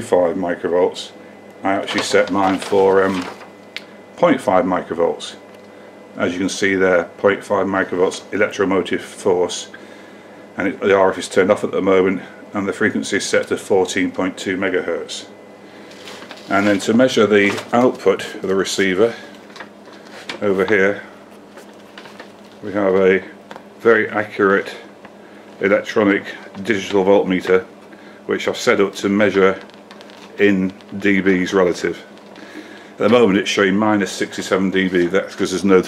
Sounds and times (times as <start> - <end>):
Speech: 0.0 - 3.4, 4.2 - 5.4, 6.2 - 9.8, 10.6 - 15.4, 16.5 - 19.4, 20.3 - 21.2, 22.6 - 24.9, 25.6 - 27.7, 28.3 - 29.7, 30.4 - 32.1, 33.0 - 35.8.